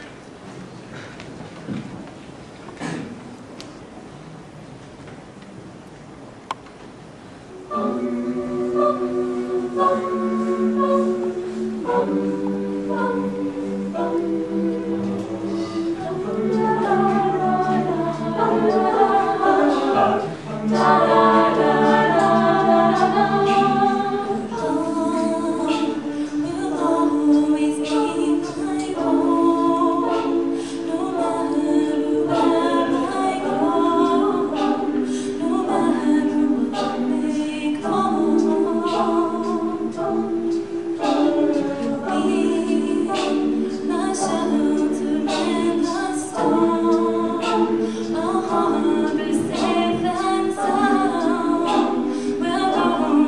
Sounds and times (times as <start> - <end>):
Gospel music: 6.6 - 53.2
A capella: 7.5 - 53.2
Choir: 7.5 - 53.2.